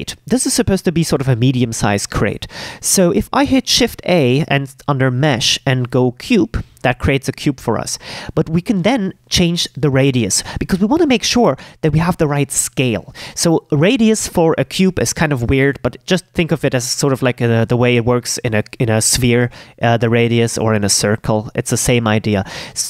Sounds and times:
Speech: 0.0s - 22.8s.

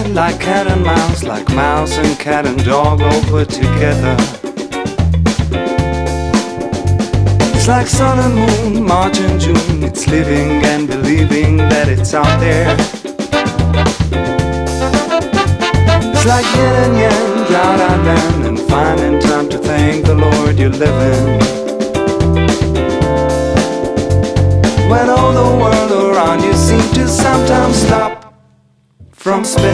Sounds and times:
Funk: 0.0s - 28.3s.

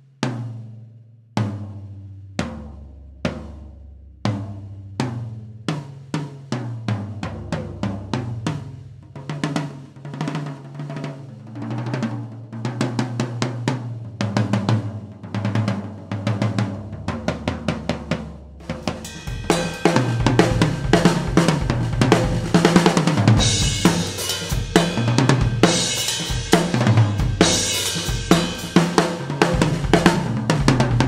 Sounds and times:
Bass drum: 1.4s - 9.4s, 12.0s - 31.0s
Drum roll: 1.4s - 31.0s.

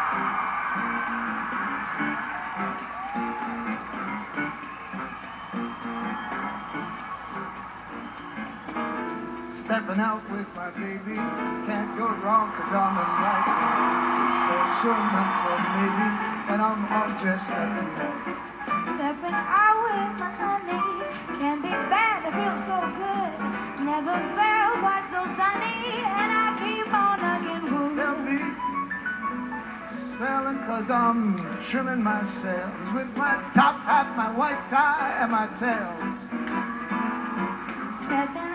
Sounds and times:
Music: 0.0s - 38.5s
Male singing: 9.6s - 13.8s, 14.4s - 18.2s, 27.2s - 28.6s, 29.9s - 36.2s
Female singing: 18.9s - 28.5s, 38.0s - 38.5s.

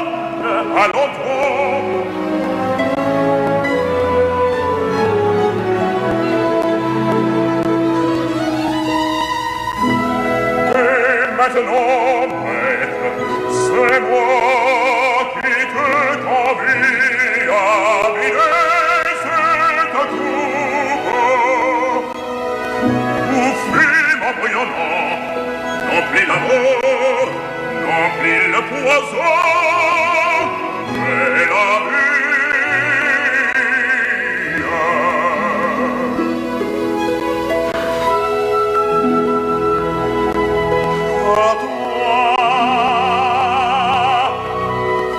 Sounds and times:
Opera: 0.0s - 45.1s.

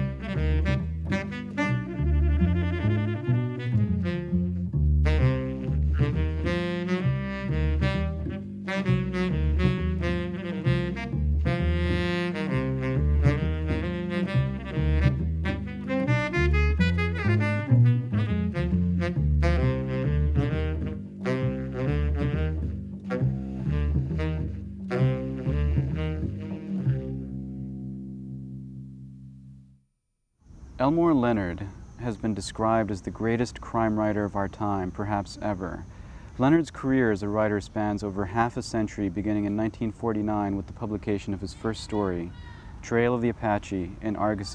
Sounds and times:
Brass instrument: 0.0s - 27.9s
Saxophone: 0.0s - 28.2s.

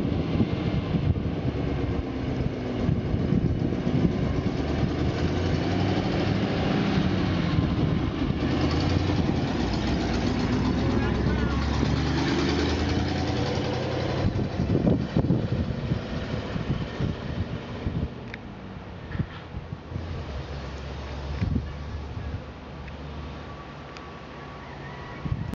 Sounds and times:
Truck: 0.0s - 25.5s.

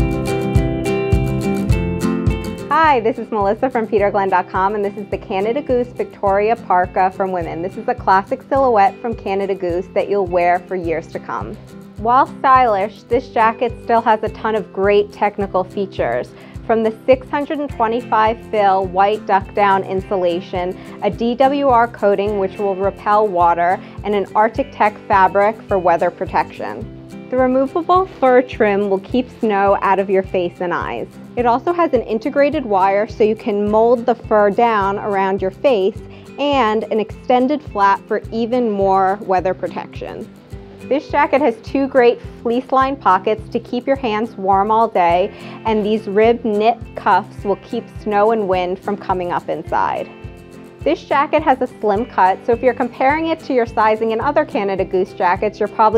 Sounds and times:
Music: 0.0s - 55.9s
Speech: 2.7s - 40.2s, 40.9s - 50.1s, 50.8s - 55.9s.

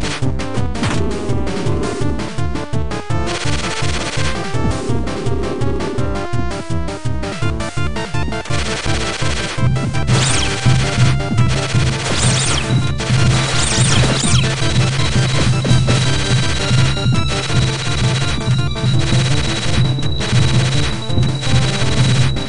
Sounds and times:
Music: 0.0s - 22.4s.

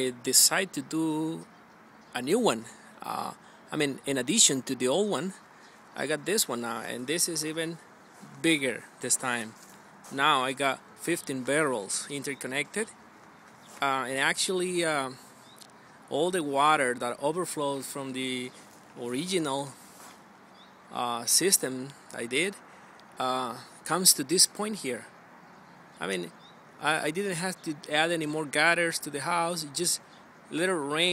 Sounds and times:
Speech: 0.0s - 1.5s, 2.2s - 5.4s, 6.0s - 12.9s, 13.8s - 15.2s, 16.1s - 19.8s, 20.9s - 22.6s, 23.2s - 25.1s, 26.0s - 31.1s.

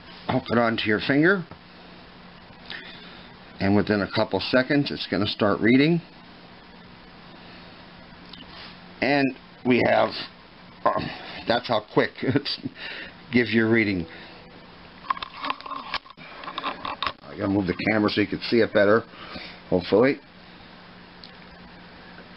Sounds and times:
Speech: 0.3s - 1.5s, 3.6s - 6.1s, 9.0s - 12.7s, 13.3s - 14.1s, 17.2s - 19.1s, 19.7s - 20.2s.

